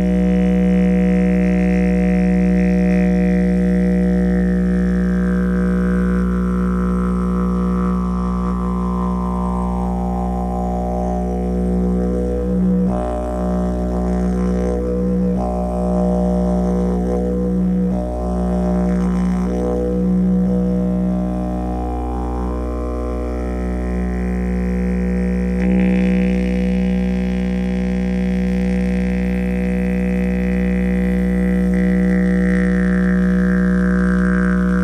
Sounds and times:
Didgeridoo: 0:00.0 - 0:34.8.

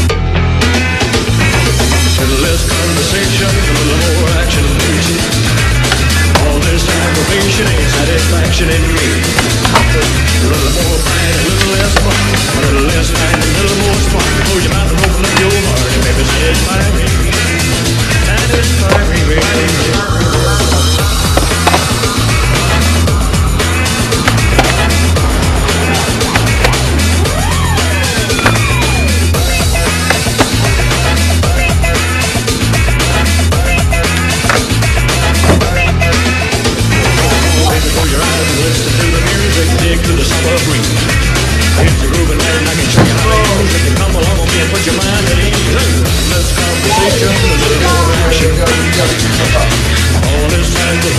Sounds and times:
Music: 0:00.0 - 0:51.1
Skateboard: 0:09.0 - 0:16.1, 0:17.6 - 0:32.0, 0:33.1 - 0:37.6.

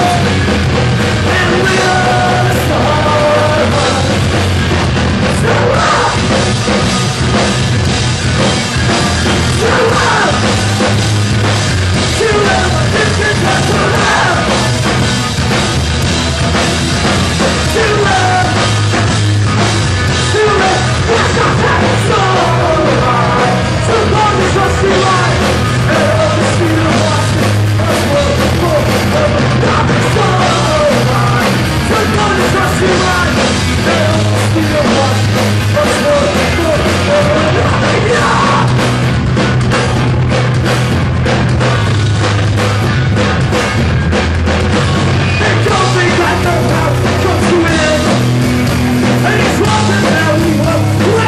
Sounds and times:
Punk rock: 0:00.0 - 0:51.2.

